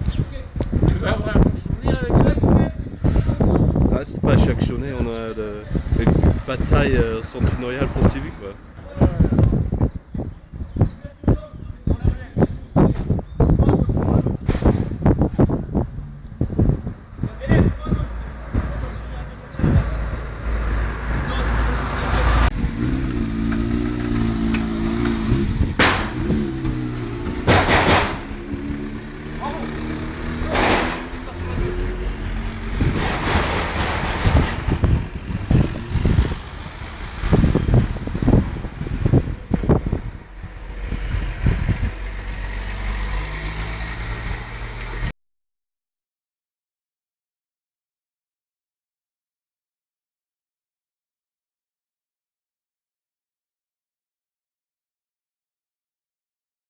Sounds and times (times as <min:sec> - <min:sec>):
Speech: 0:00.2 - 0:02.9, 0:03.9 - 0:09.5, 0:11.0 - 0:12.8, 0:17.2 - 0:20.1, 0:21.2 - 0:22.5, 0:29.4 - 0:29.8, 0:31.2 - 0:31.8.